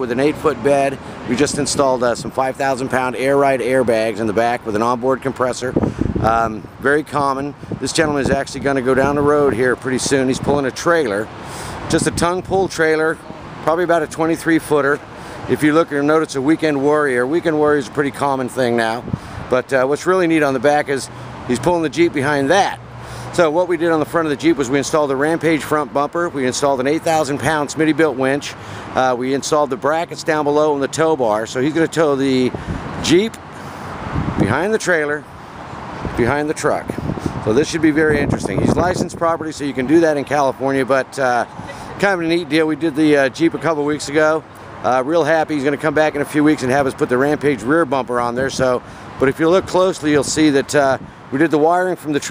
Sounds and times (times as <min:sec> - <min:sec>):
Speech: 0:00.0 - 0:11.3, 0:11.9 - 0:22.8, 0:23.4 - 0:33.4, 0:34.4 - 0:35.3, 0:36.2 - 0:52.3.